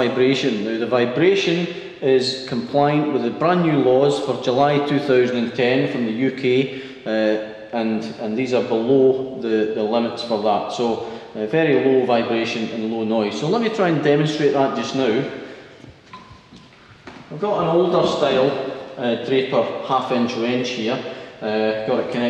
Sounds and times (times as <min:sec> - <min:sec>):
Speech: 0:00.0 - 0:15.4, 0:17.3 - 0:22.2.